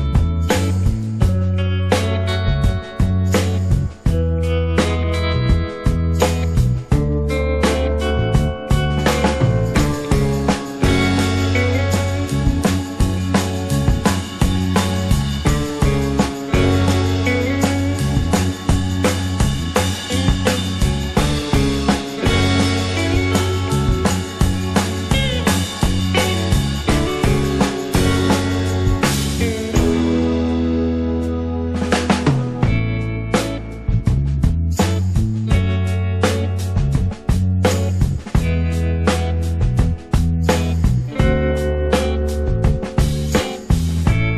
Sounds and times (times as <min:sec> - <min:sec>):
Music: 0:00.0 - 0:44.3.